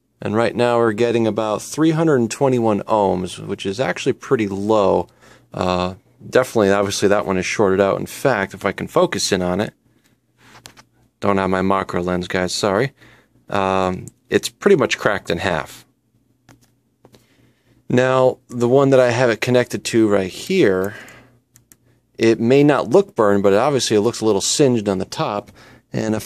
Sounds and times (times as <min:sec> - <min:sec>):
Speech: 0:00.2 - 0:09.8, 0:11.2 - 0:15.9, 0:17.9 - 0:21.3, 0:22.2 - 0:26.2.